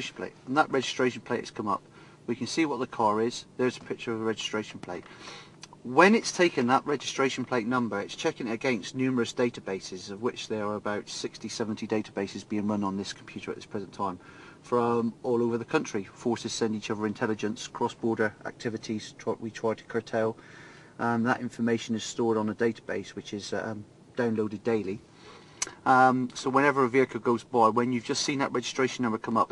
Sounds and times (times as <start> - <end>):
Speech: 0.0 - 20.4, 21.0 - 25.0, 25.6 - 29.5.